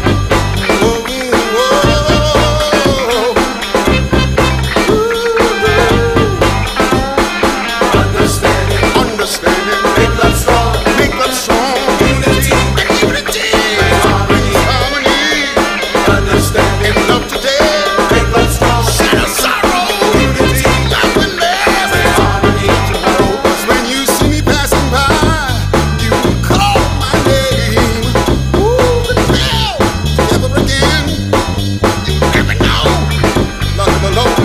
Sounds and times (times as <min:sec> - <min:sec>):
Hip hop music: 0:00.0 - 0:34.4.